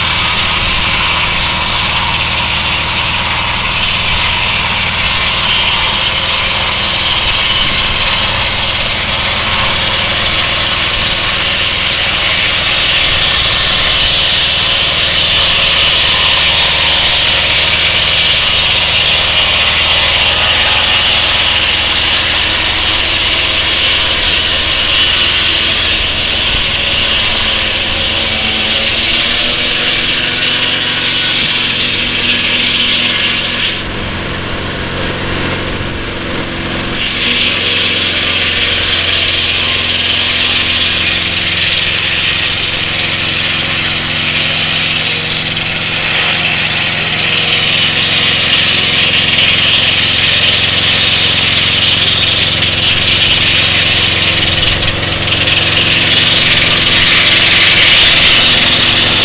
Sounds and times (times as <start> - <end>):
Light engine (high frequency): 0.0 - 59.2.